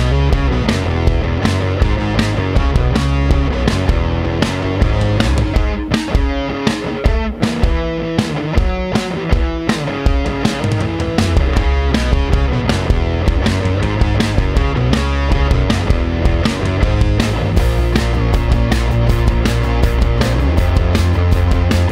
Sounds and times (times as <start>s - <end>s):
Music: 0.0s - 21.9s.